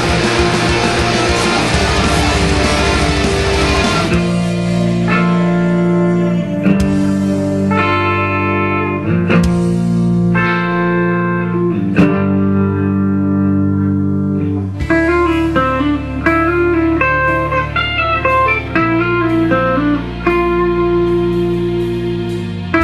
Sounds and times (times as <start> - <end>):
Blues: 0.0 - 22.8
Guitar: 0.0 - 22.8.